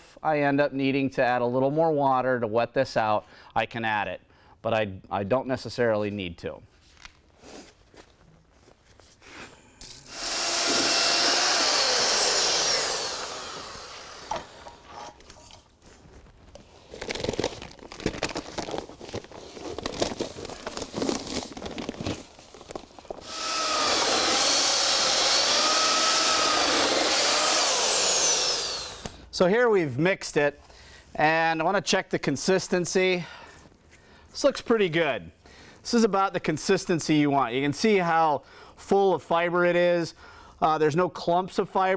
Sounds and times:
Speech: 0:00.1 - 0:06.7, 0:29.3 - 0:30.6, 0:31.2 - 0:33.3, 0:34.4 - 0:35.3, 0:35.9 - 0:41.9.

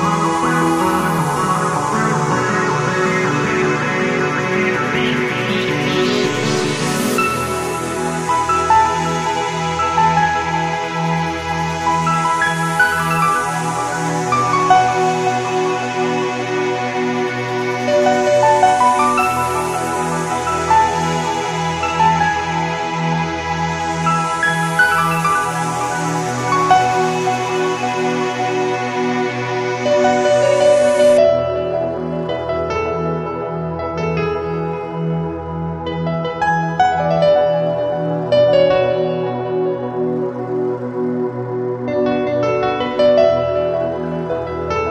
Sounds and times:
Music: 0:00.0 - 0:44.9.

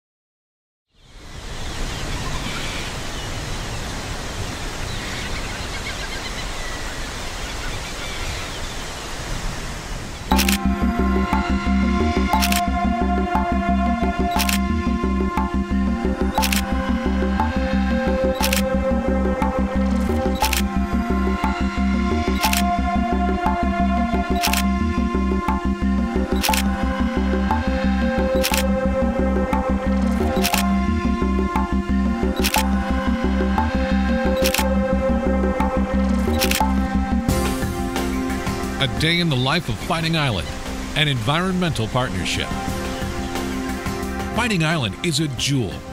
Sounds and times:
Wind: 0:00.9 - 0:11.5, 0:36.0 - 0:45.9.

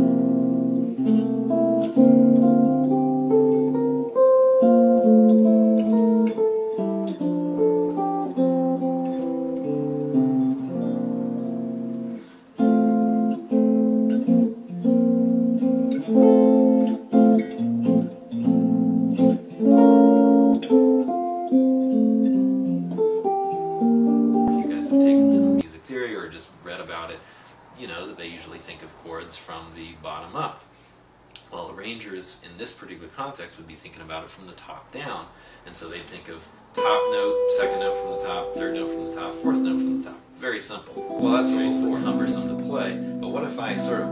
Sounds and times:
Guitar: 0:00.0 - 0:29.4, 0:35.8 - 0:44.1
Speech: 0:24.5 - 0:27.2, 0:27.8 - 0:30.7, 0:31.4 - 0:44.1.

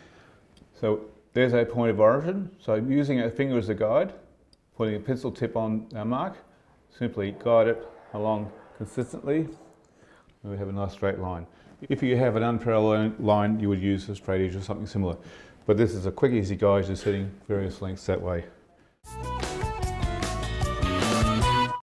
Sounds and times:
Speech: 0:00.8 - 0:09.8, 0:10.4 - 0:18.6
Music: 0:19.1 - 0:21.8.

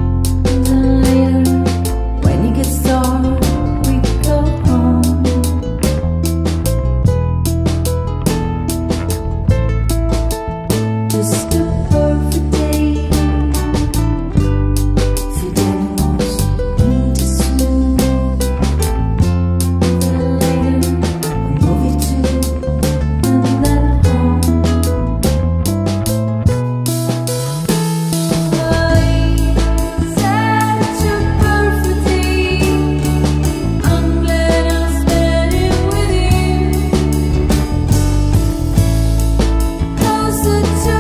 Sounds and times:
Christmas music: 0:00.0 - 0:41.0.

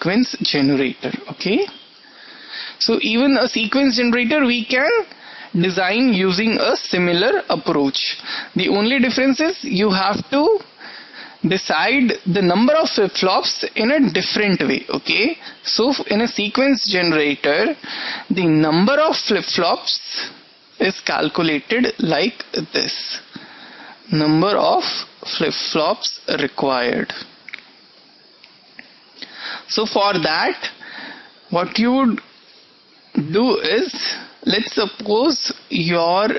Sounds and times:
Speech: 0:00.0 - 0:01.7, 0:02.8 - 0:10.7, 0:11.4 - 0:23.3, 0:24.1 - 0:27.3, 0:29.7 - 0:30.8, 0:31.5 - 0:32.2, 0:33.2 - 0:36.3.

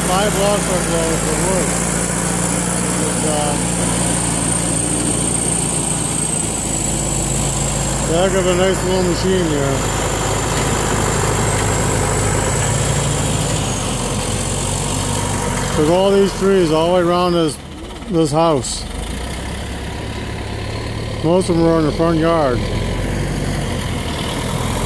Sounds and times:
Speech: 0:00.0 - 0:01.8, 0:03.0 - 0:03.6, 0:08.1 - 0:09.8, 0:15.8 - 0:18.9, 0:21.2 - 0:22.7.

